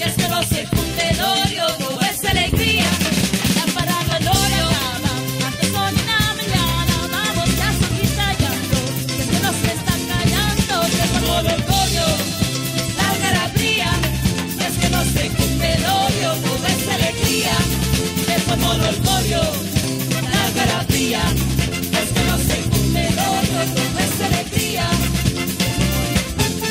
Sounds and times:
Salsa music: 0.0 - 26.7
Musical instrument: 4.3 - 26.7.

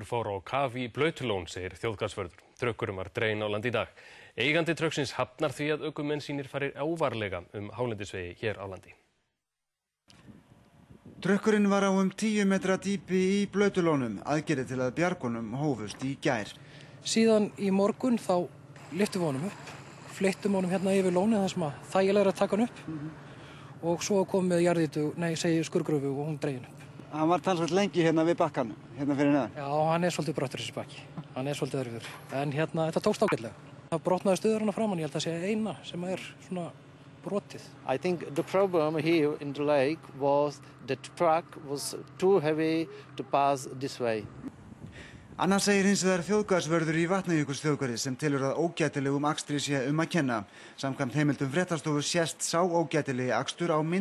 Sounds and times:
Speech: 0.0 - 9.0, 11.2 - 23.1, 23.8 - 44.3, 45.4 - 54.0.

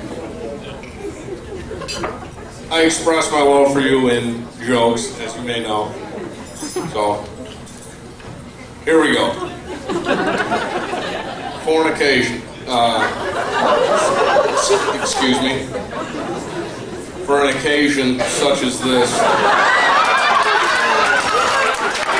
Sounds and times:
Male speech, man speaking: 2.7 - 6.0, 6.8 - 7.4, 8.9 - 9.4, 11.6 - 13.2, 14.6 - 15.8, 17.3 - 19.3.

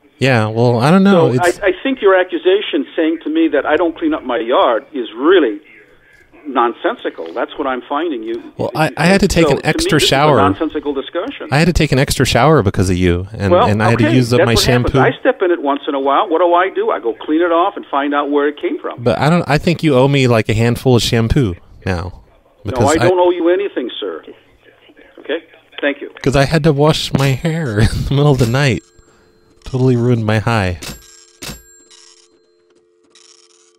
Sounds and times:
Speech: 0.2 - 28.8, 29.7 - 30.8.

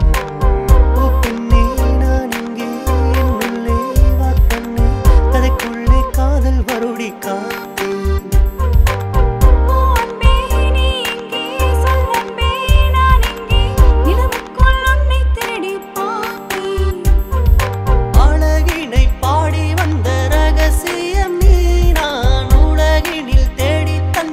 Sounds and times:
Dance music: 0.0 - 24.3.

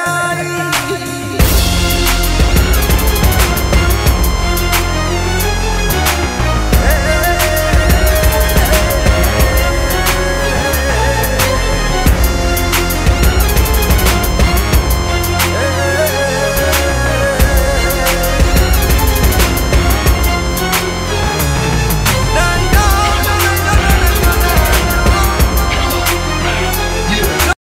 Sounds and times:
Theme music: 0.0 - 27.6.

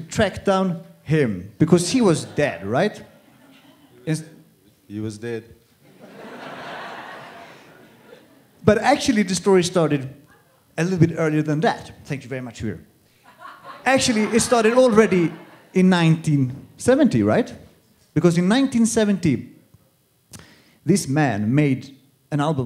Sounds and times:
Speech: 0.0 - 3.1, 4.0 - 5.6, 8.6 - 12.9, 13.9 - 19.5, 20.9 - 22.6.

